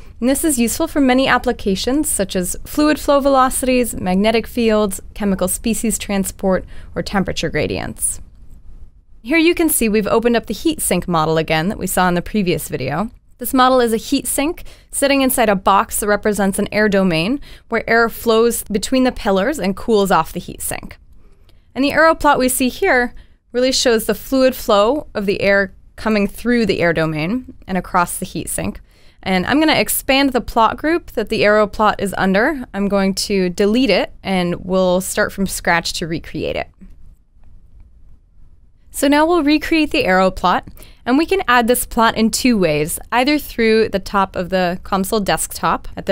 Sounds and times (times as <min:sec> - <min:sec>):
Speech: 0:00.2 - 0:08.2, 0:09.3 - 0:21.0, 0:21.8 - 0:36.8, 0:39.0 - 0:46.1.